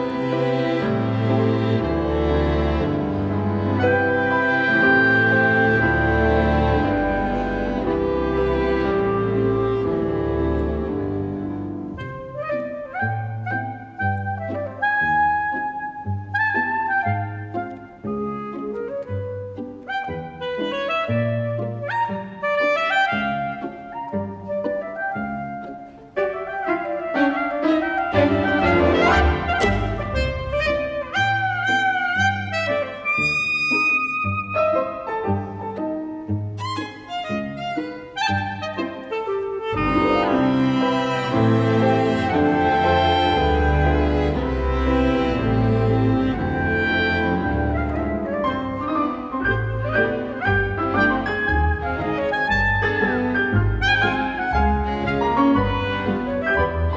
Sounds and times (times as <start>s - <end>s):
Music: 0.0s - 56.9s.